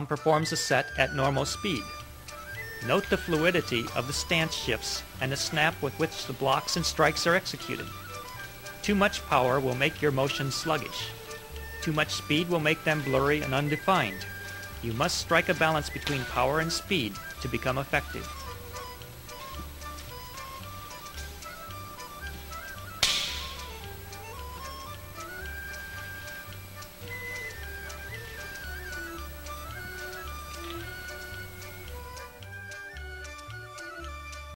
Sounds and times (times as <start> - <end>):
Music: 0.0 - 34.5.